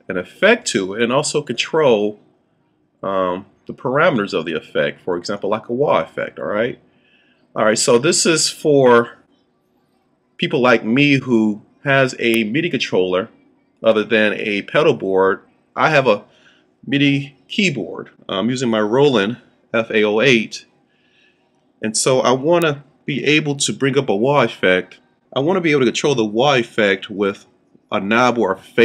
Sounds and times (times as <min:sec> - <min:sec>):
Speech: 0:00.0 - 0:02.2, 0:03.0 - 0:06.8, 0:07.6 - 0:09.2, 0:10.4 - 0:16.3, 0:16.9 - 0:20.6, 0:21.8 - 0:28.8.